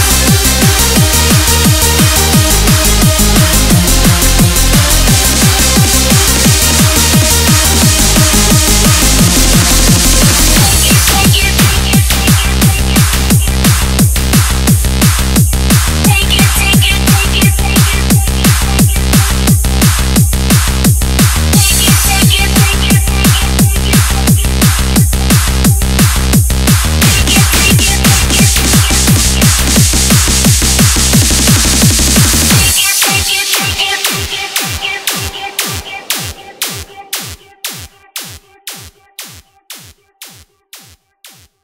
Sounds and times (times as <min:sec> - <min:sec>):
Electronic dance music: 0:00.0 - 0:41.6.